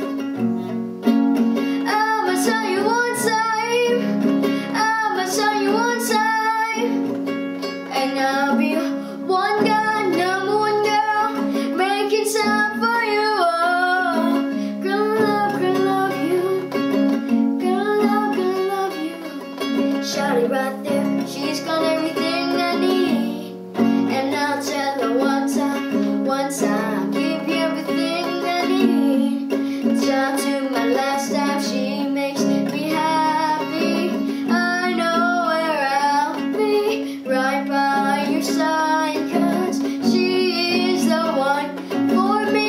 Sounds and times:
Acoustic guitar: 0:00.0 - 0:42.6.

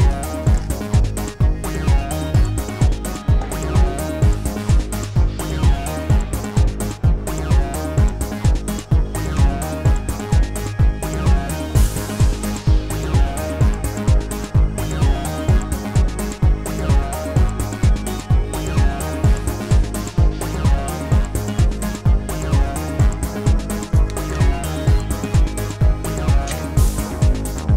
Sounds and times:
Music: 0:00.0 - 0:27.7.

